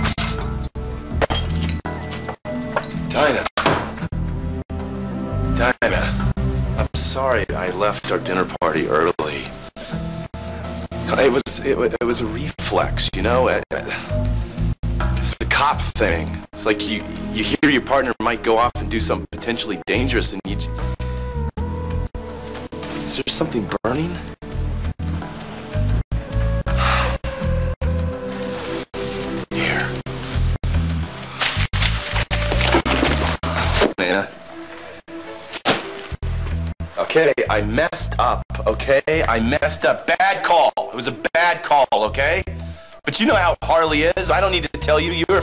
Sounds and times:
Music: 0.0 - 45.4
Speech: 3.1 - 3.5, 5.6 - 6.2, 6.8 - 9.5, 11.1 - 14.0, 15.2 - 20.7, 23.1 - 24.2, 34.0 - 34.3, 37.0 - 42.5, 43.1 - 45.4.

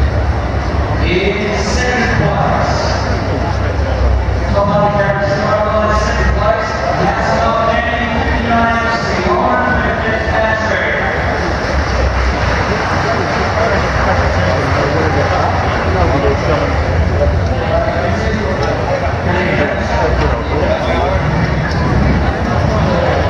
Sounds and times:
Speech: 1.0 - 23.3.

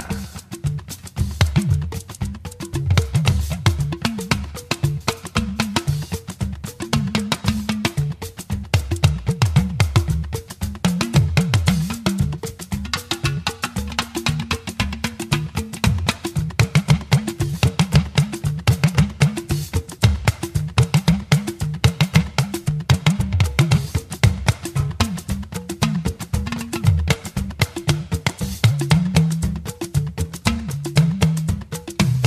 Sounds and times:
Afrobeat: 0.0 - 32.2.

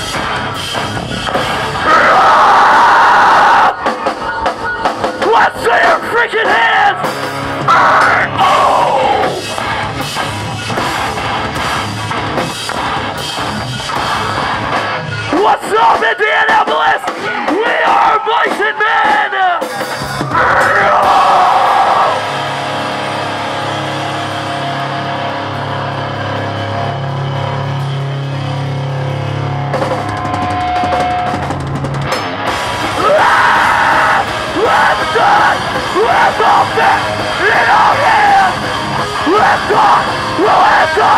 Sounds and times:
Music: 0.0 - 41.1
Speech: 3.8 - 7.0, 15.2 - 19.7.

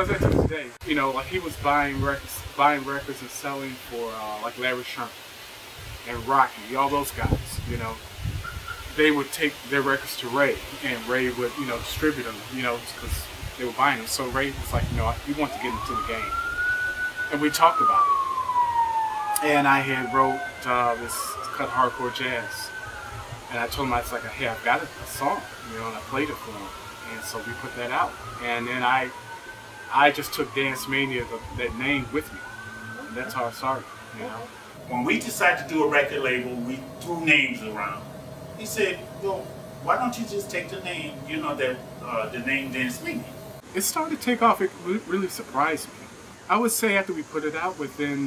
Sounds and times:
Speech: 0.0 - 5.1, 6.1 - 8.0, 9.0 - 16.3, 17.3 - 18.1, 19.4 - 22.7, 23.5 - 29.2, 29.9 - 32.4, 33.0 - 38.0, 38.6 - 45.9, 46.5 - 48.2
Emergency vehicle: 6.9 - 7.7, 8.3 - 43.7.

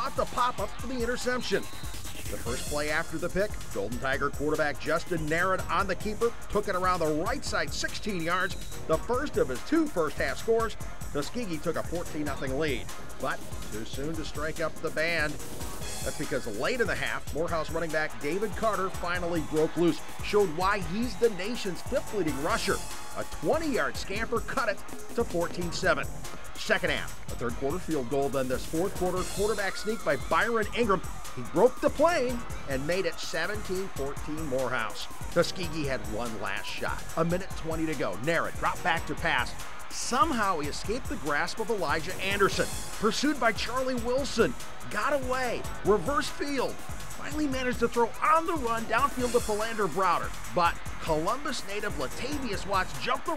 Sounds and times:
Speech: 0.0 - 1.7, 2.3 - 15.4, 16.0 - 53.3
Music: 0.0 - 53.3.

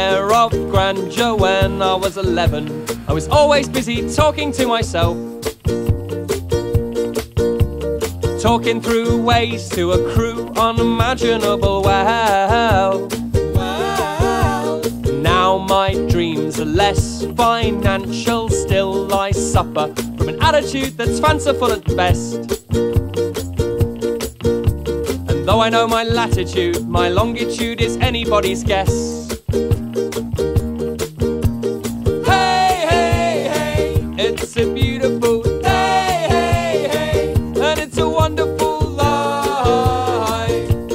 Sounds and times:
Music: 0.0 - 40.9.

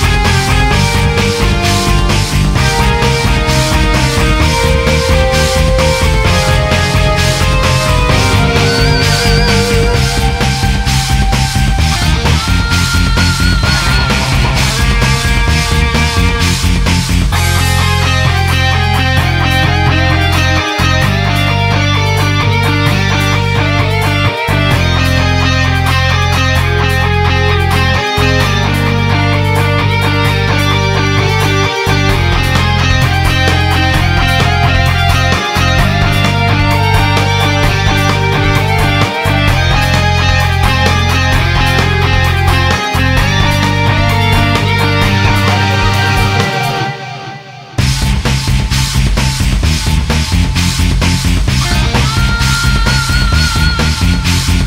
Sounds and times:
Music: 0.0 - 54.6.

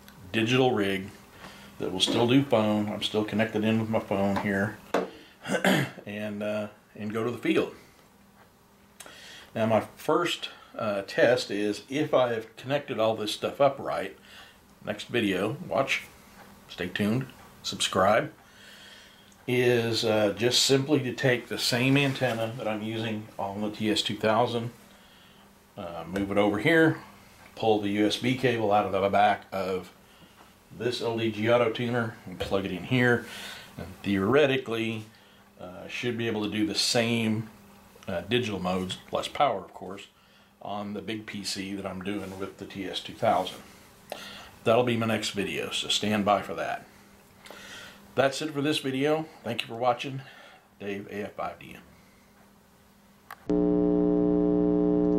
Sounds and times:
Inside, small room: 0.0 - 55.1
Speech: 0.2 - 1.2, 1.8 - 4.8, 5.6 - 7.8, 9.6 - 14.2, 14.8 - 16.1, 16.7 - 18.4, 19.5 - 24.8, 25.8 - 30.0, 30.7 - 43.7, 44.6 - 46.9, 48.2 - 51.9.

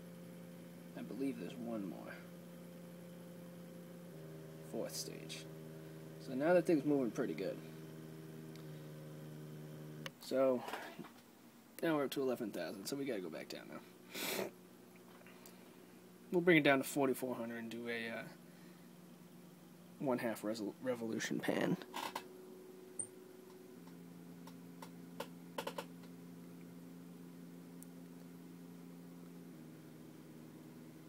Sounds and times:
Inside, small room: 0.0 - 31.0
Speech: 0.9 - 2.2, 4.7 - 5.5, 6.2 - 7.6, 10.2 - 10.7, 11.8 - 13.9, 16.3 - 18.4, 20.0 - 21.8.

